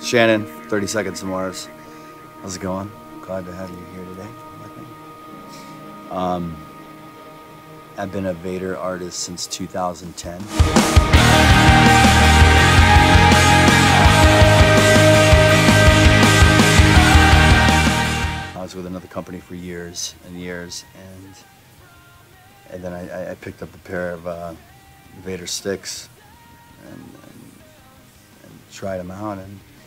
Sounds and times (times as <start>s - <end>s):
Speech: 0.0s - 1.7s, 2.4s - 4.9s, 5.5s - 6.6s, 8.0s - 10.5s, 18.6s - 21.5s, 22.7s - 24.6s, 25.2s - 26.2s, 26.8s - 27.5s, 28.4s - 29.8s
Percussion: 10.4s - 18.5s.